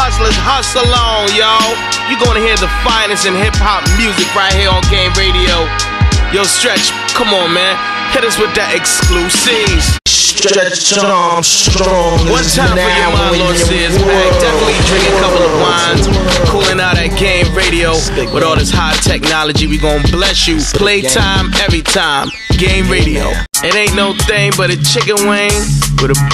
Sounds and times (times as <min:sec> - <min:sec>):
Speech: 0:00.0 - 0:05.7, 0:06.3 - 0:26.3
Music: 0:00.0 - 0:26.3.